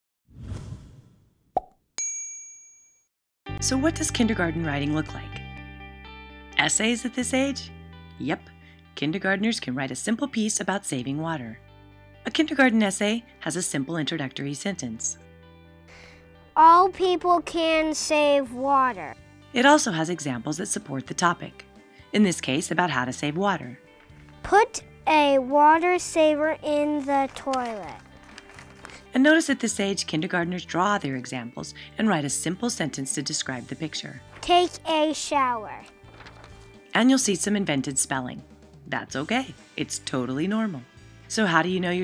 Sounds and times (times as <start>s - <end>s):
Speech: 3.6s - 5.4s, 6.6s - 8.4s, 9.0s - 11.6s, 12.3s - 15.2s, 16.6s - 21.6s, 22.2s - 23.8s, 24.5s - 28.0s, 29.2s - 35.9s, 37.0s - 42.0s.